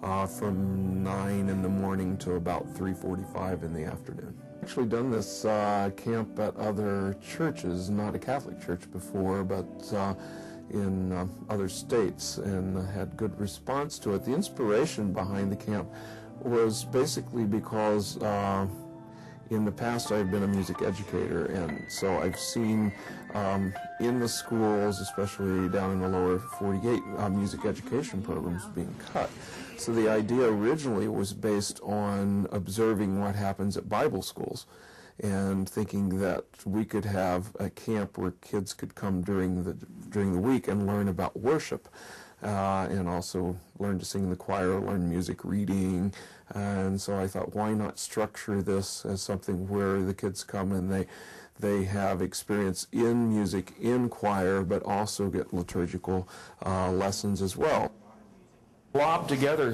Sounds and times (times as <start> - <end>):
Speech: 0.0 - 18.8, 19.5 - 59.7
Music: 0.0 - 58.0, 58.9 - 59.7.